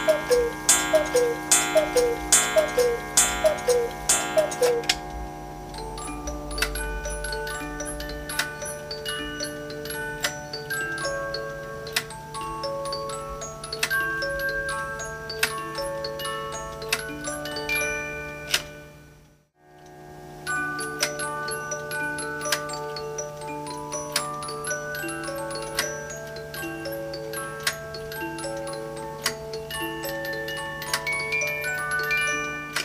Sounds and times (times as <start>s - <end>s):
Clock: 0.0s - 14.7s, 25.3s - 32.8s
Music: 0.0s - 32.8s.